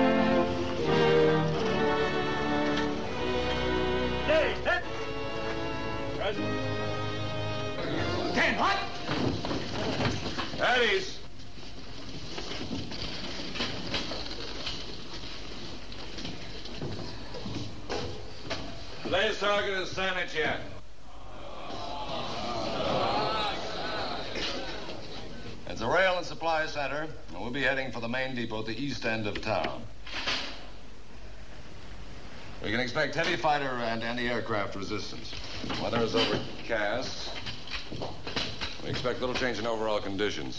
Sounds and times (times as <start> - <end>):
Speech: 8.3 - 9.0, 10.6 - 11.2, 19.1 - 20.8, 25.6 - 29.9, 32.6 - 37.4, 38.8 - 40.5.